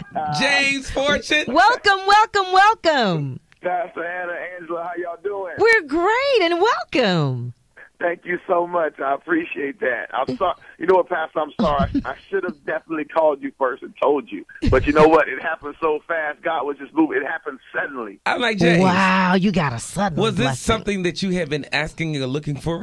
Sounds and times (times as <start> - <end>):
Radio: 0.0 - 1.8, 7.8 - 19.0
Speech: 0.1 - 22.8.